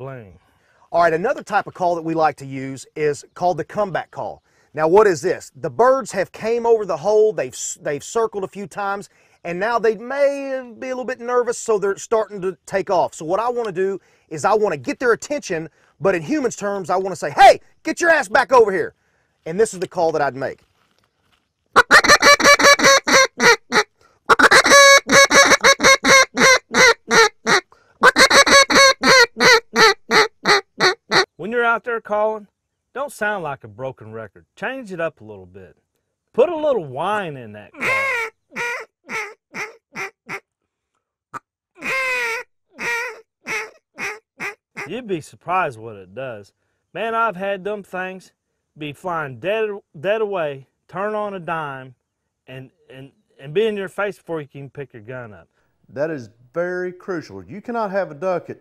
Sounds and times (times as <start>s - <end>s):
Speech: 0.0s - 18.9s, 19.5s - 20.6s, 31.4s - 35.8s, 36.4s - 38.0s, 44.9s - 58.6s.